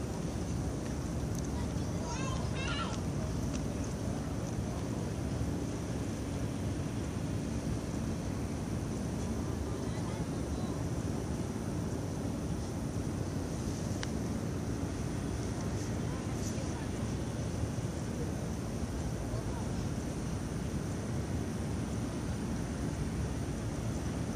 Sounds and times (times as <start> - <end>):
Speech: 1.5 - 3.4, 9.6 - 10.9, 15.7 - 17.3, 19.2 - 20.0.